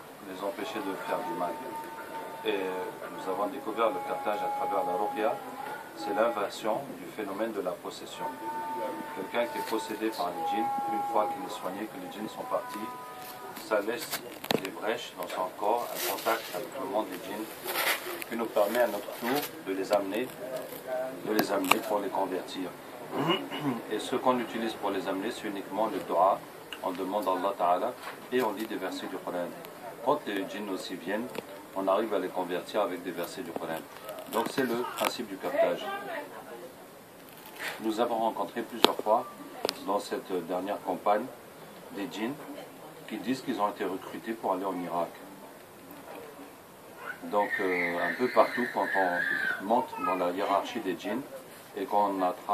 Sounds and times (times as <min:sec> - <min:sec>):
Speech: 0:00.2 - 0:22.8, 0:23.4 - 0:36.9, 0:37.8 - 0:46.6, 0:47.2 - 0:52.5.